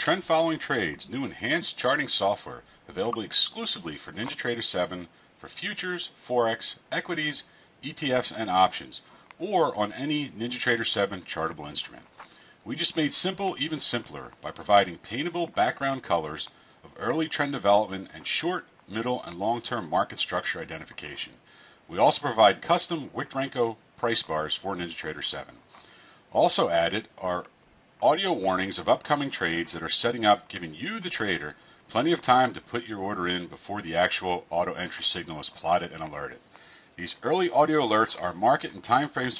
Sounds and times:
Speech: 0.0s - 25.6s, 26.3s - 36.4s, 37.0s - 39.3s.

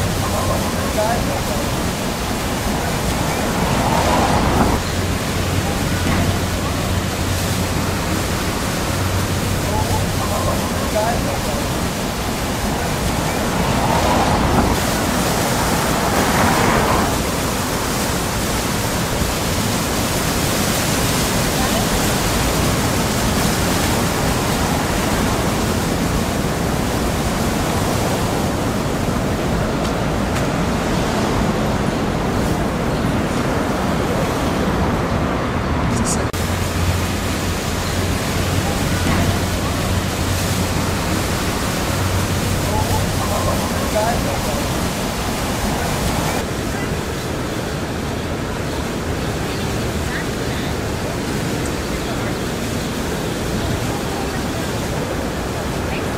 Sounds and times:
Outside, urban or manmade: 0.0s - 56.1s.

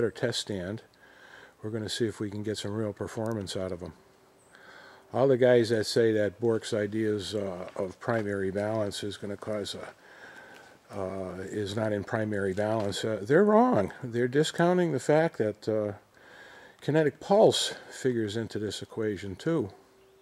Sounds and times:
Speech: 0.0s - 0.9s, 1.6s - 4.0s, 5.1s - 10.0s, 10.9s - 16.0s, 16.8s - 19.8s.

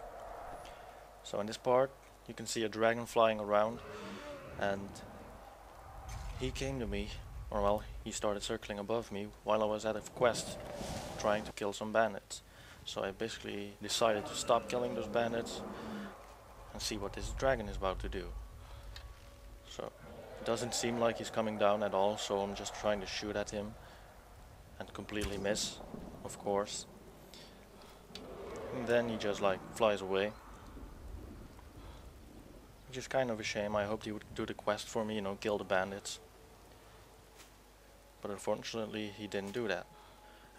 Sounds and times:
Speech: 1.2s - 3.8s, 4.6s - 5.1s, 6.4s - 10.6s, 11.2s - 15.7s, 16.7s - 18.4s, 19.7s - 23.8s, 24.8s - 26.9s, 28.7s - 30.4s, 32.9s - 36.2s, 38.2s - 39.9s.

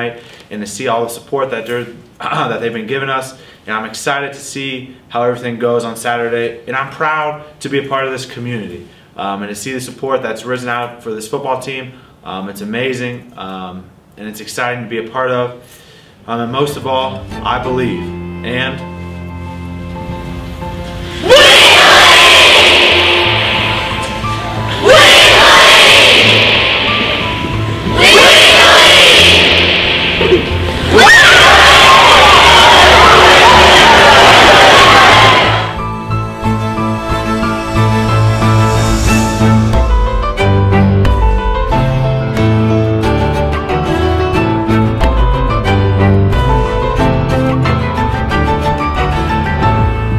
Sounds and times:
Speech: 0.0s - 15.6s, 16.3s - 18.9s
Music: 16.2s - 50.1s.

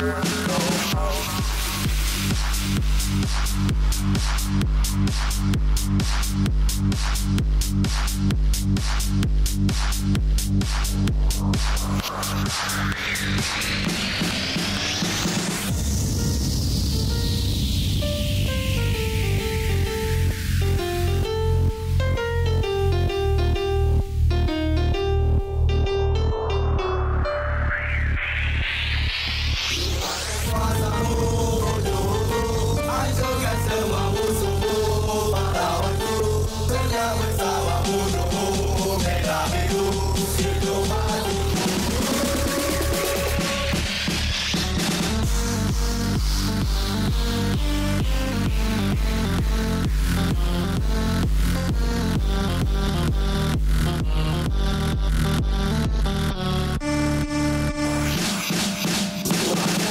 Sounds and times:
Music: 0.0s - 59.9s.

